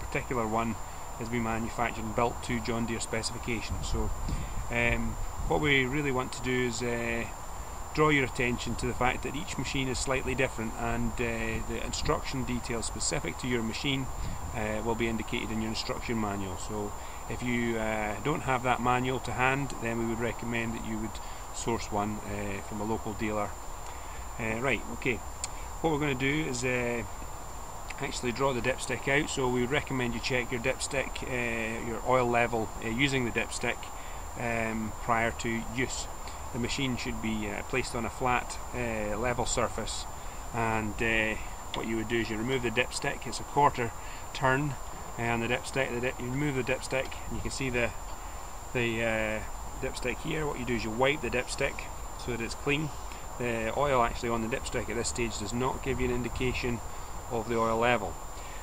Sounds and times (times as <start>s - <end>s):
Speech: 0.0s - 23.6s, 24.4s - 25.2s, 25.8s - 27.1s, 27.9s - 48.0s, 48.7s - 58.2s.